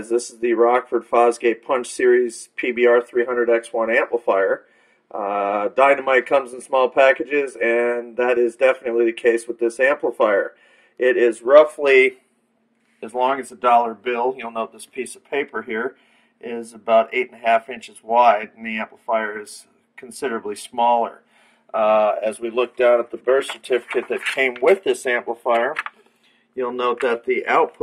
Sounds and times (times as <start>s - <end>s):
Speech: 0.0s - 12.2s, 13.0s - 25.9s, 26.6s - 27.8s.